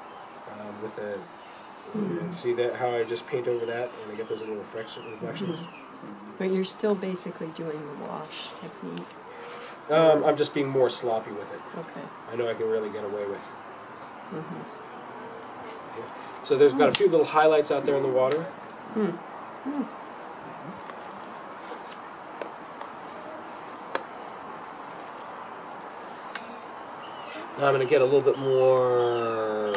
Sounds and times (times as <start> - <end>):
Speech: 2.0 - 5.7, 9.9 - 13.5, 16.5 - 19.8, 27.6 - 29.7.